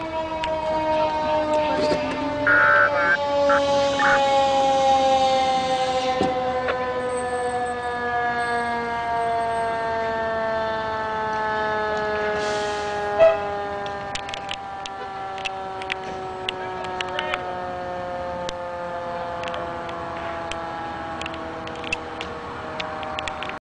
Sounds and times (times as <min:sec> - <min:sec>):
Vehicle: 0:00.0 - 0:23.6
Speech: 0:16.6 - 0:17.6.